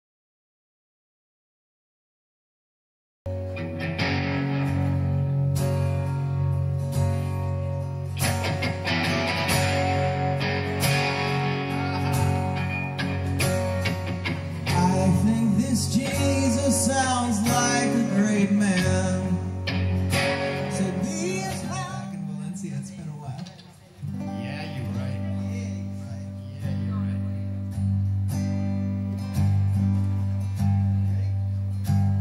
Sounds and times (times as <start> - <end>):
Music: 3.3 - 32.2
Speech: 21.5 - 27.5.